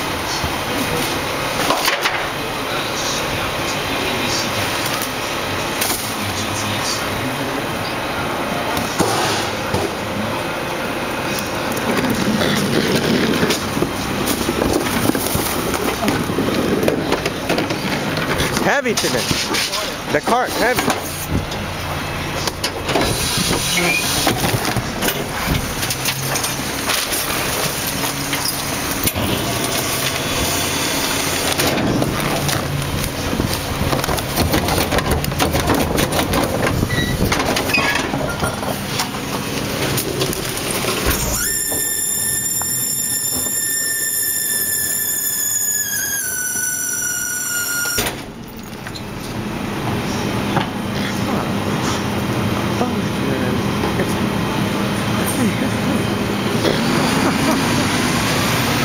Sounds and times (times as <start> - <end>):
Speech: 0.2 - 1.4, 2.2 - 9.0, 18.5 - 21.0, 51.0 - 51.9, 52.7 - 54.4.